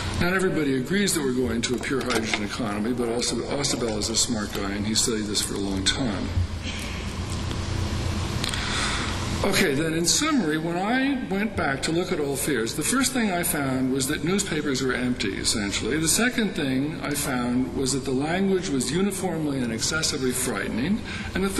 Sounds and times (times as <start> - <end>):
Narration, monologue: 0.0 - 21.5
Male speech, man speaking: 0.2 - 6.4, 9.4 - 21.5.